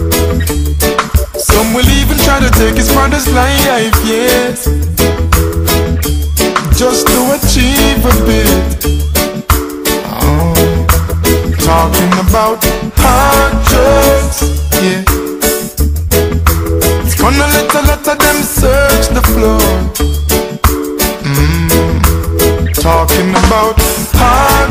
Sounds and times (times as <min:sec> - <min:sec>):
Music: 0:00.0 - 0:24.7.